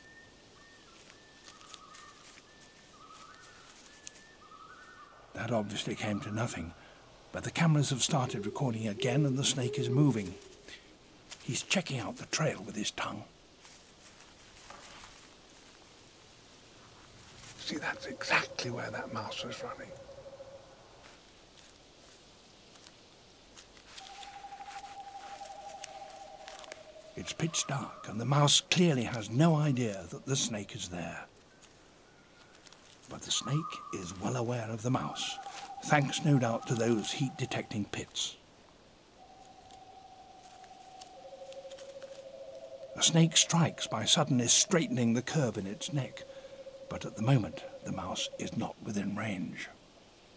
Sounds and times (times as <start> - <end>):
Speech: 5.4 - 6.8, 7.4 - 10.4, 11.4 - 13.3, 17.6 - 20.0, 27.2 - 31.3, 33.1 - 38.4, 43.0 - 46.2, 46.9 - 49.8
Wild animals: 7.4 - 10.8, 17.6 - 20.8, 33.1 - 38.0.